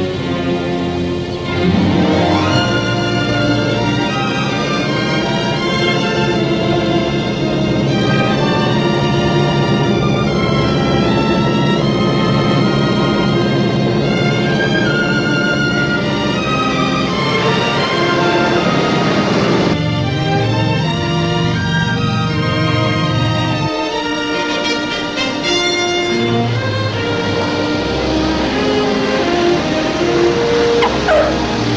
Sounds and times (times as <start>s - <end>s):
Music: 0.0s - 31.7s.